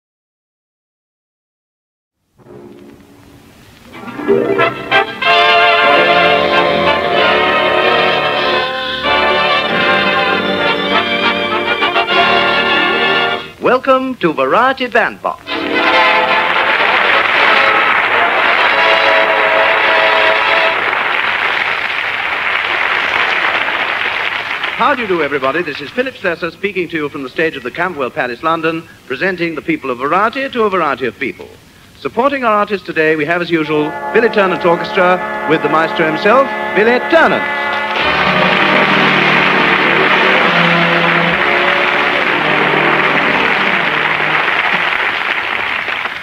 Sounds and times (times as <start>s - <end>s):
Speech: 13.6s - 15.5s, 24.8s - 37.5s.